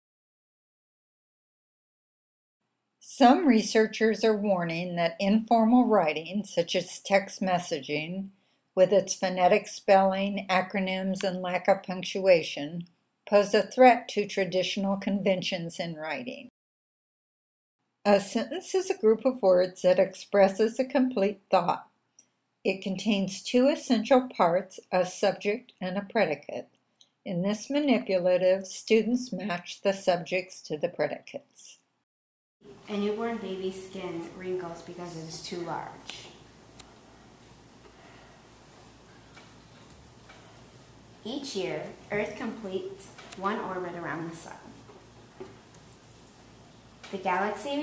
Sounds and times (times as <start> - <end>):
Speech: 3.0 - 16.5, 18.1 - 21.8, 22.7 - 26.6, 27.3 - 31.8, 32.9 - 36.4, 41.3 - 44.8, 47.1 - 47.8.